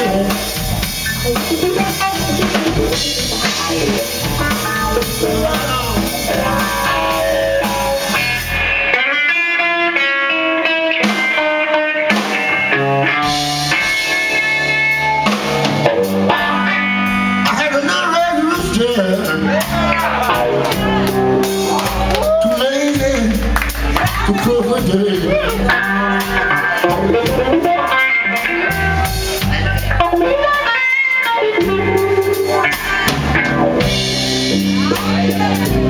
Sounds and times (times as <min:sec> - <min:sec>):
Music: 0:00.0 - 0:35.9.